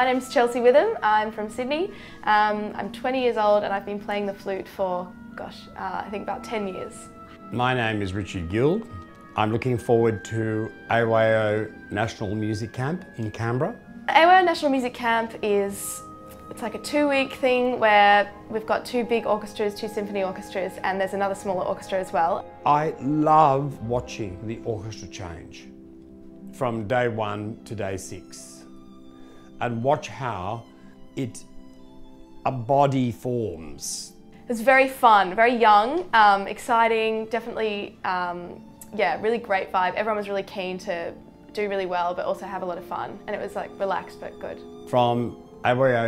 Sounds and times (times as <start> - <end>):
Soul music: 0.0 - 46.0.